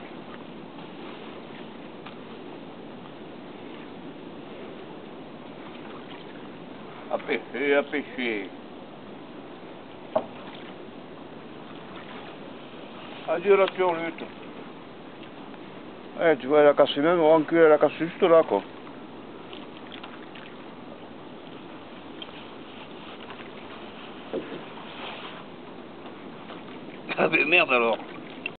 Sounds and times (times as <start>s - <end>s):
Speech: 7.1s - 8.5s, 13.3s - 14.3s, 16.2s - 18.7s, 27.1s - 28.0s.